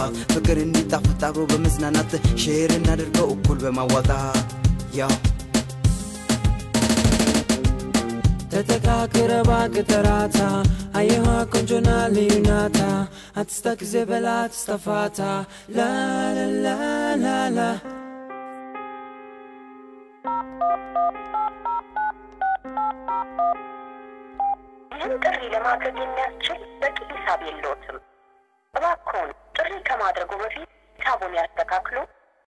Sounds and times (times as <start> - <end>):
Music: 0.0 - 29.4
Speech: 25.0 - 28.0, 28.8 - 32.2.